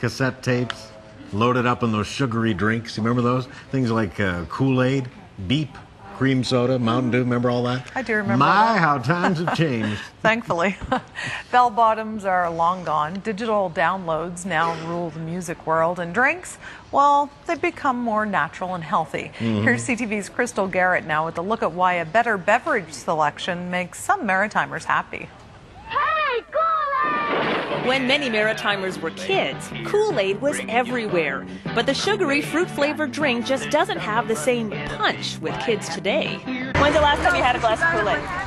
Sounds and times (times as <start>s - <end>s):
Music: 27.9s - 38.4s.